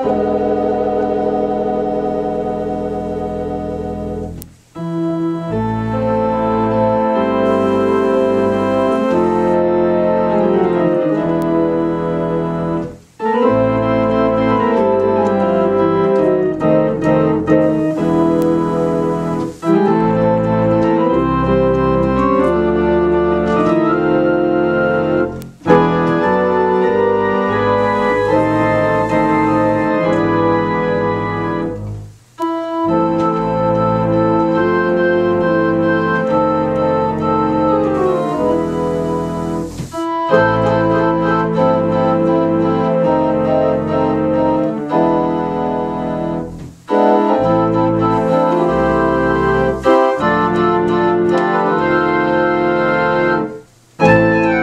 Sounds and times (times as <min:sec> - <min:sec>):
Electronic organ: 0:00.0 - 0:54.6
Piano: 0:00.0 - 0:54.6.